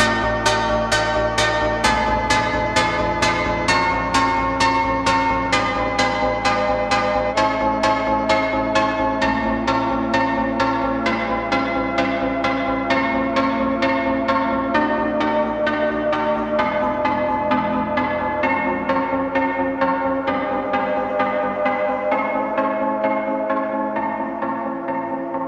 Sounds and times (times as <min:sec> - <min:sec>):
Music: 0:00.0 - 0:25.4.